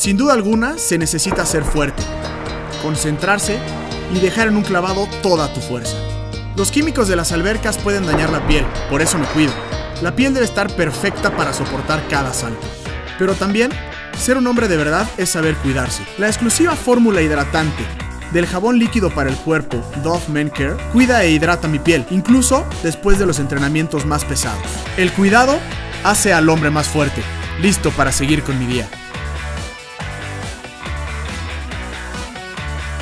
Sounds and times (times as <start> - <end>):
Speech: 0.0 - 2.0, 2.8 - 6.0, 6.6 - 29.0
Music: 0.0 - 33.0.